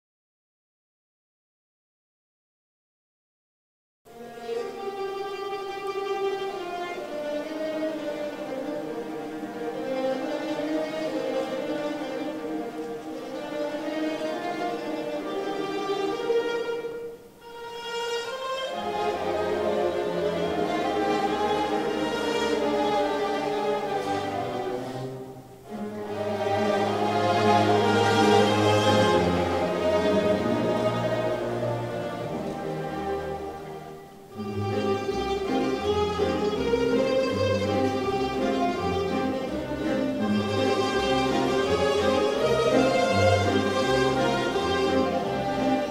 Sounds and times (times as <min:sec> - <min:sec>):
Classical music: 0:04.1 - 0:45.9
Orchestra: 0:04.1 - 0:45.9
Mandolin: 0:04.2 - 0:45.9.